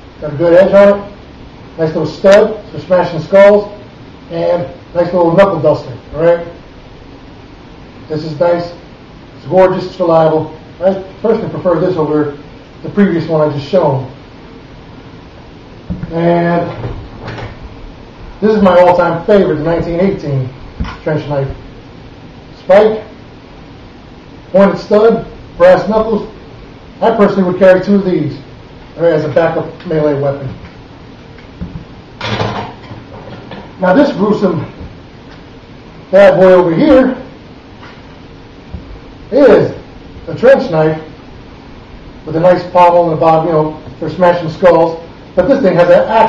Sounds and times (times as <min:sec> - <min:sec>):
Inside, small room: 0:00.0 - 0:46.2
Speech: 0:00.2 - 0:01.2, 0:01.8 - 0:06.6, 0:08.1 - 0:08.8, 0:09.4 - 0:14.2, 0:16.0 - 0:16.8, 0:18.4 - 0:21.6, 0:22.6 - 0:23.2, 0:24.5 - 0:26.4, 0:27.0 - 0:30.6, 0:33.8 - 0:34.8, 0:36.1 - 0:37.4, 0:39.3 - 0:41.1, 0:42.3 - 0:46.2.